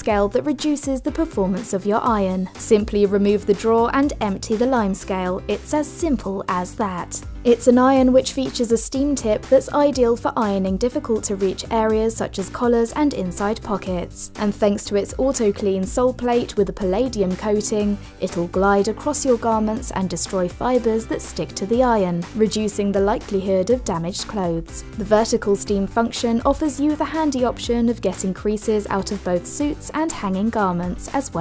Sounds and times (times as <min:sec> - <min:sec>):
Music: 0:00.0 - 0:31.4
Speech: 0:00.0 - 0:31.4.